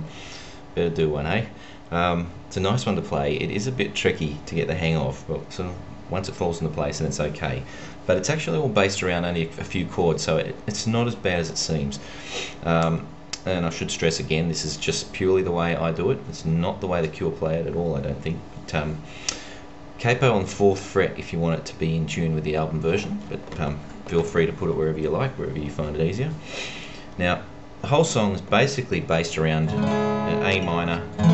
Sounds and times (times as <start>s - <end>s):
Speech: 0.8s - 12.0s, 12.6s - 19.1s, 20.0s - 26.4s, 27.2s - 31.3s.